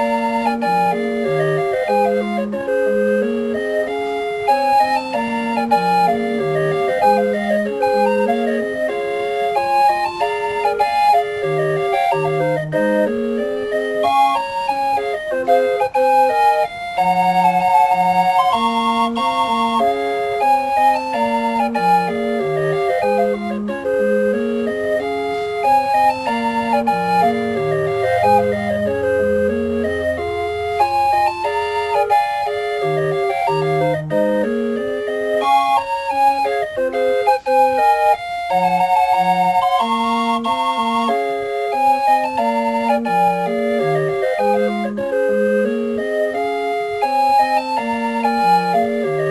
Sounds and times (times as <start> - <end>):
Organ: 0.0 - 49.3.